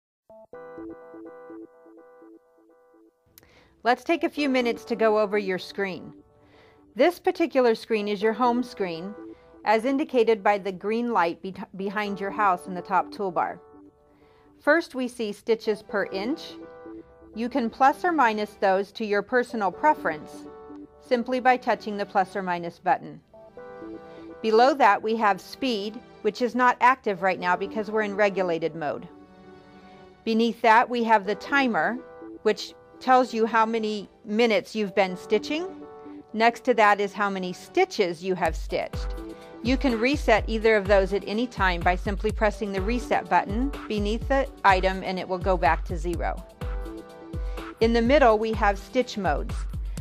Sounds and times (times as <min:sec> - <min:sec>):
Synthesizer: 0:00.3 - 0:50.0.